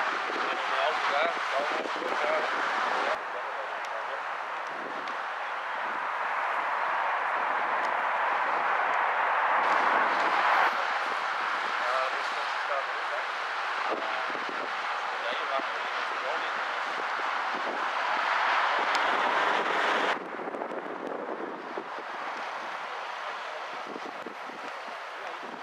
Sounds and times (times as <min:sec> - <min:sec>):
Vehicle: 0:00.0 - 0:25.6
Speech: 0:00.4 - 0:04.2, 0:11.8 - 0:13.3, 0:15.1 - 0:16.8.